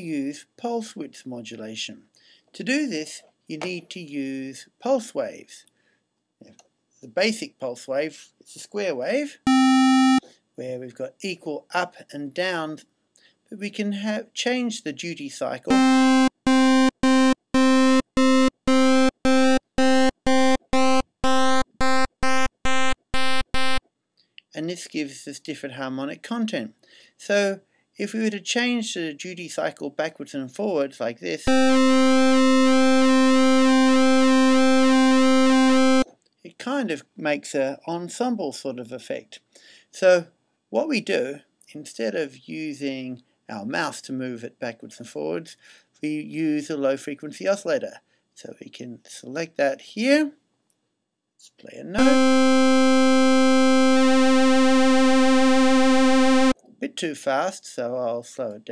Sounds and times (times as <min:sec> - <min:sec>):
Speech: 0:00.0 - 0:02.0, 0:02.6 - 0:05.7, 0:06.4 - 0:09.5, 0:10.6 - 0:12.8, 0:13.5 - 0:15.8, 0:24.5 - 0:31.5, 0:36.5 - 0:39.4, 0:40.0 - 0:50.4, 0:51.4 - 0:52.3, 0:56.8 - 0:58.7.